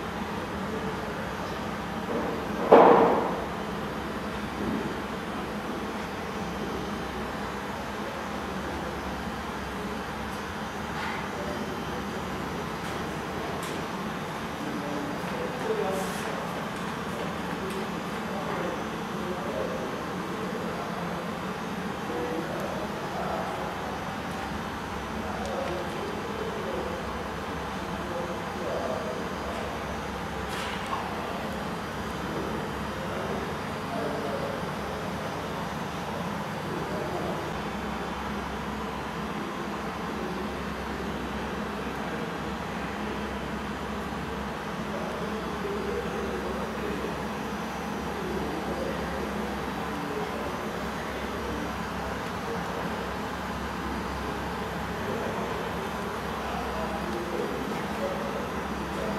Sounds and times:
Speech: 0:00.0 - 0:59.1.

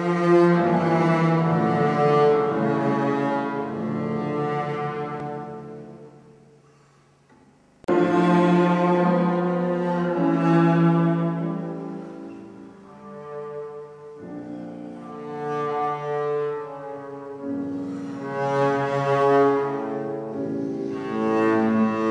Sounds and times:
Double bass: 0:00.0 - 0:06.6, 0:07.8 - 0:22.1.

